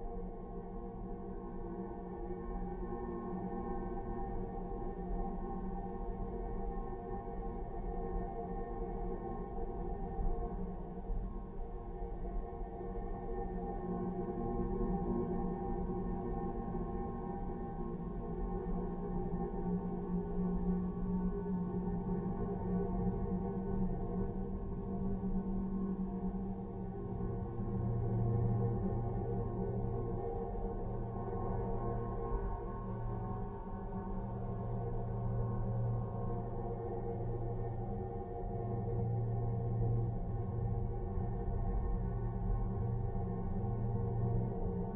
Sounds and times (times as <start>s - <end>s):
Music: 0.0s - 44.9s.